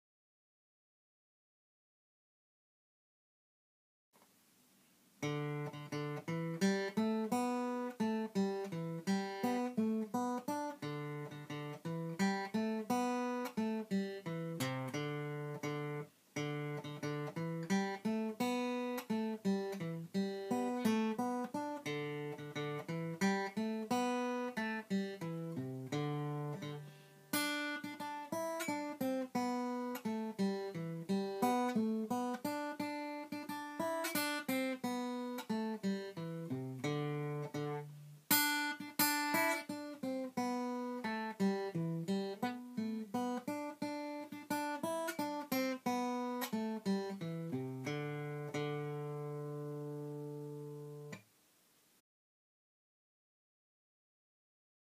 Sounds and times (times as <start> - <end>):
Acoustic guitar: 4.2 - 51.8.